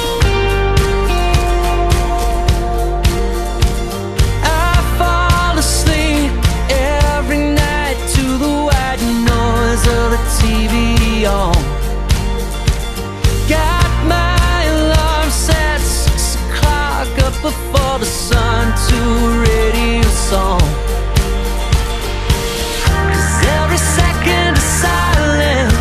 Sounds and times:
Music: 0.0 - 25.8.

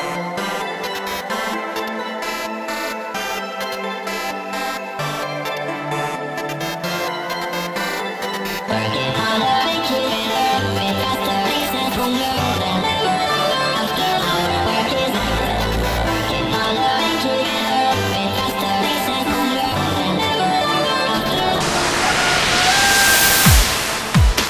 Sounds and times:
Dubstep: 9.4 - 24.4.

